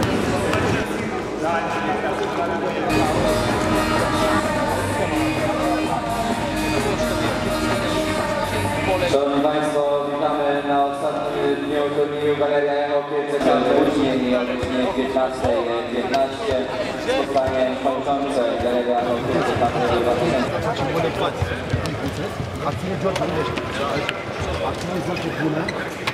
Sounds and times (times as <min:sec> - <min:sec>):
Music: 0:02.8 - 0:09.5
Speech: 0:07.8 - 0:26.1.